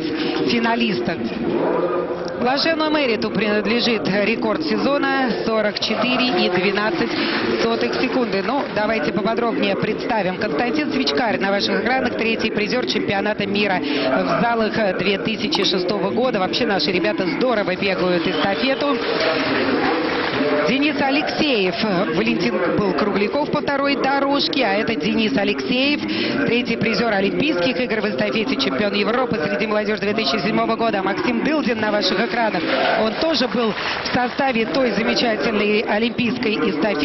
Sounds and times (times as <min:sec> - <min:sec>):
Inside, public space: 0:00.0 - 0:37.0
Speech: 0:00.0 - 0:37.0.